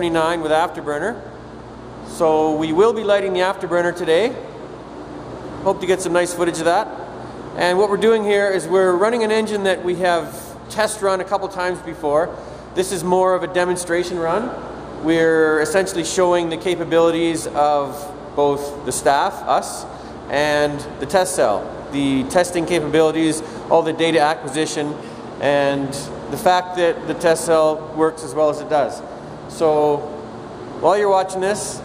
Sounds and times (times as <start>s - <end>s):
Speech: 0.0s - 1.3s, 2.1s - 4.5s, 5.6s - 7.0s, 7.6s - 30.2s, 30.8s - 31.8s.